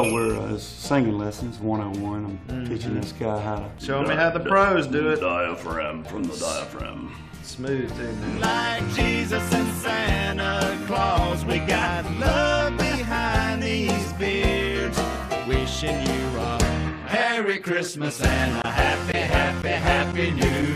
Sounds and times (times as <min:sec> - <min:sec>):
Speech: 0:00.0 - 0:08.2
Music: 0:00.0 - 0:20.7.